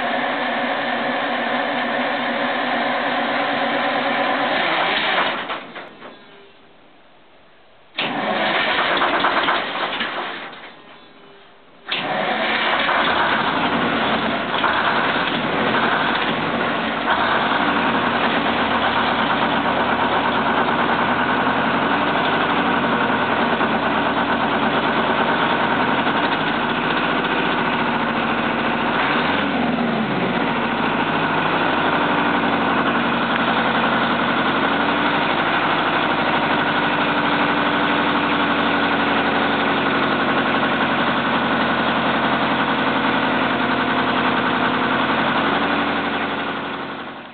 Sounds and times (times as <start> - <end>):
Truck: 0.0 - 6.6, 8.0 - 47.3.